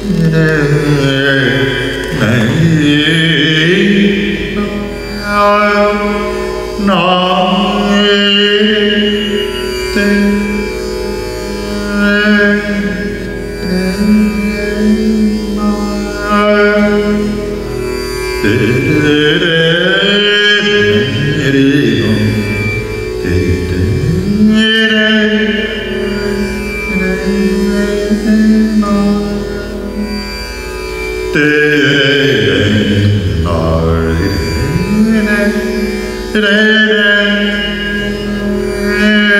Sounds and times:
Carnatic music: 0.0s - 39.3s
Musical instrument: 0.0s - 39.3s.

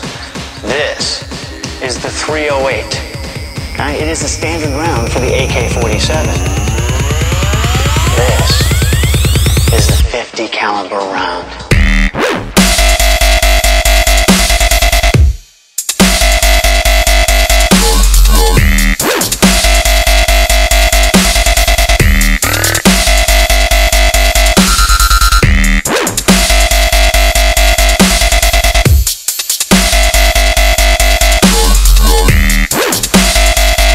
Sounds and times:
Dubstep: 0.0s - 33.9s.

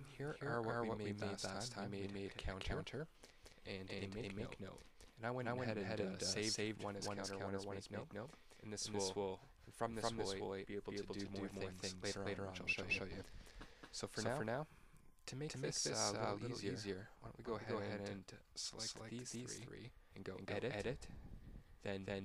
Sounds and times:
Speech: 0.0s - 3.1s, 3.7s - 13.2s, 14.0s - 14.7s, 15.3s - 21.1s, 21.8s - 22.2s.

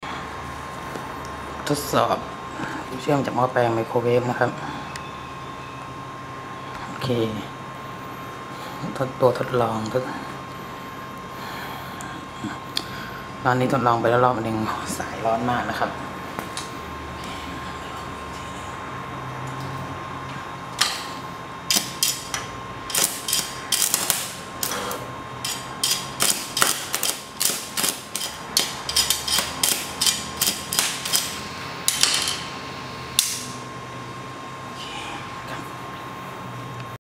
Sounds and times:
Microwave oven: 0.0s - 37.0s.

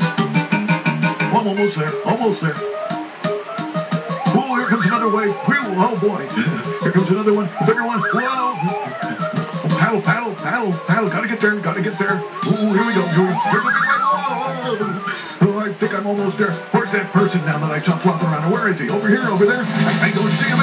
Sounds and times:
Music: 0.0s - 20.6s
Speech: 1.3s - 2.6s, 4.3s - 8.9s, 9.7s - 20.6s.

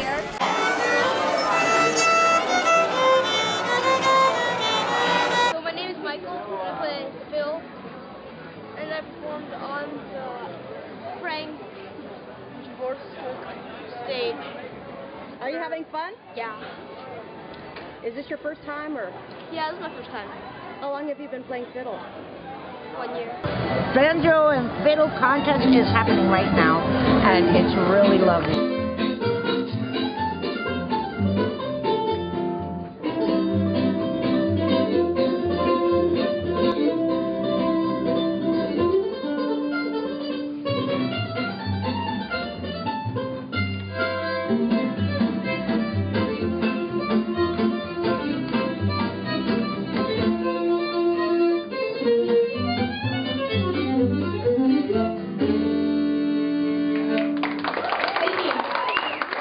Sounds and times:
Guitar: 0.0s - 6.2s, 23.4s - 57.6s.

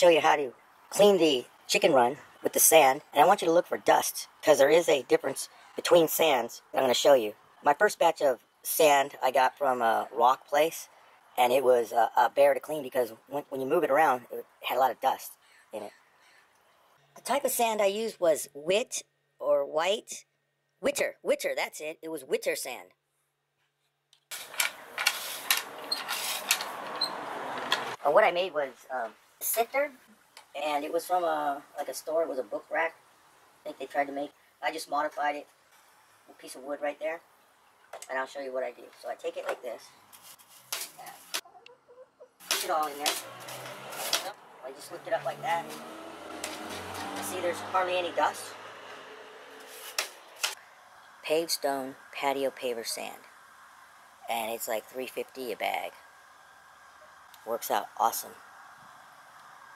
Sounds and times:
Speech: 0.0s - 16.0s, 17.2s - 20.2s, 20.8s - 22.9s, 28.0s - 30.0s, 30.6s - 33.0s, 33.6s - 35.5s, 36.3s - 37.2s, 38.0s - 39.9s, 42.5s - 43.2s, 44.2s - 45.8s, 47.2s - 48.6s, 51.2s - 53.3s, 54.2s - 56.0s, 57.4s - 58.4s.

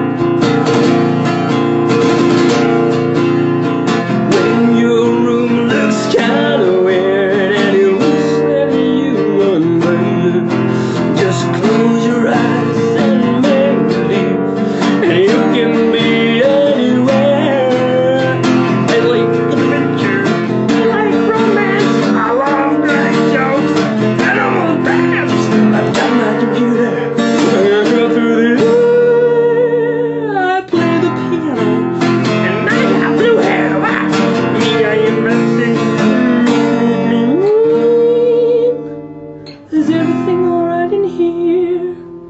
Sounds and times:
Acoustic guitar: 0.0s - 42.3s.

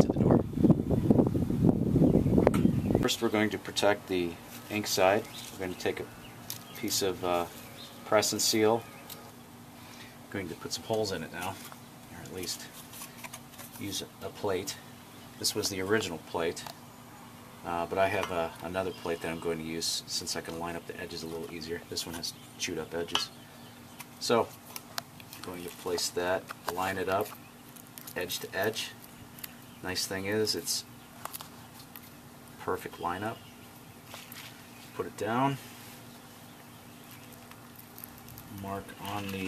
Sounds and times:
Speech: 3.0s - 6.1s, 6.8s - 8.9s, 10.3s - 12.8s, 13.8s - 14.8s, 15.4s - 16.7s, 17.6s - 23.3s, 24.2s - 24.5s, 25.4s - 27.3s, 28.2s - 29.0s, 29.8s - 30.9s, 32.6s - 33.4s, 35.0s - 35.7s, 38.5s - 39.4s.

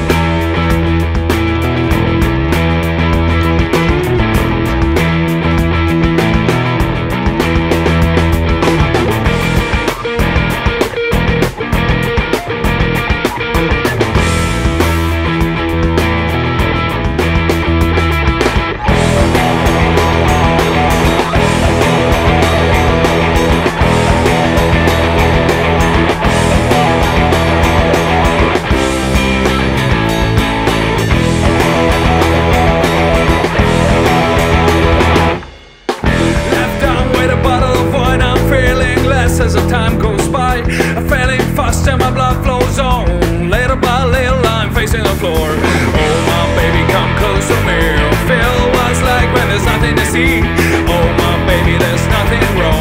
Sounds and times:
Music: 0.0s - 52.8s.

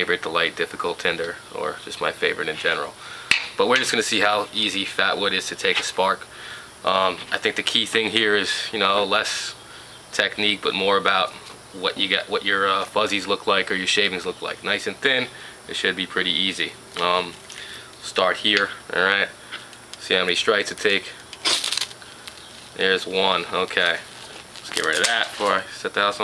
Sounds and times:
Speech: 0.0s - 3.0s, 3.6s - 17.4s, 18.0s - 19.4s, 20.0s - 21.2s, 22.8s - 24.1s, 24.7s - 26.2s.

